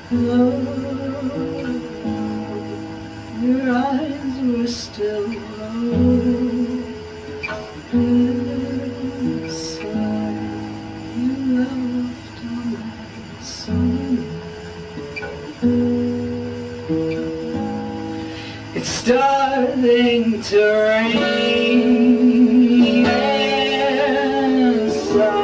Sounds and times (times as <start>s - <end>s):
Music: 0.0s - 25.4s.